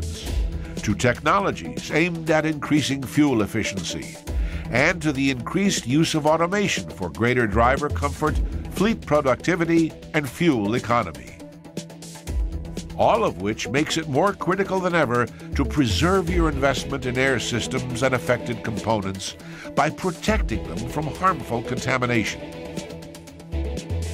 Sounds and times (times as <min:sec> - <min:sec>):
Music: 0:00.0 - 0:24.1
Speech: 0:00.1 - 0:11.4, 0:13.0 - 0:22.4.